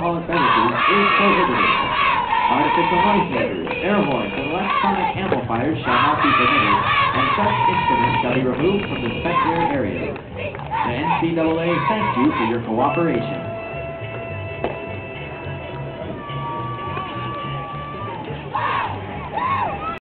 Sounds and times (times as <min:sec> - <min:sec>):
Music: 0:00.0 - 0:20.0
Speech: 0:02.5 - 0:10.2, 0:10.8 - 0:13.4.